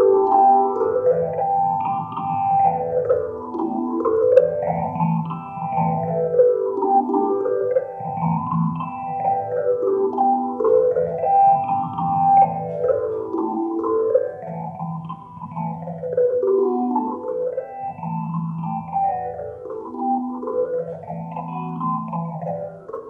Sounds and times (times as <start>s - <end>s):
Plucked string instrument: 0.0s - 23.0s.